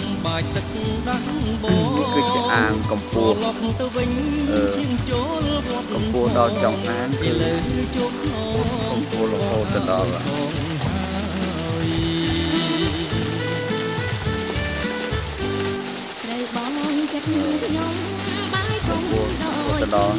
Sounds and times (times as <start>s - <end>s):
Water: 0.0s - 20.1s.